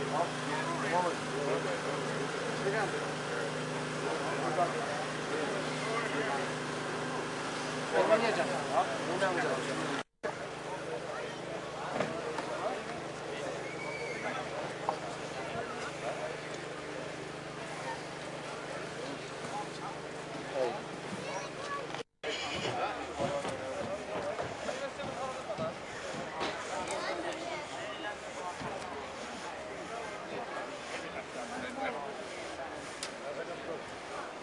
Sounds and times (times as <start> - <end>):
Speech: 0.0 - 34.4.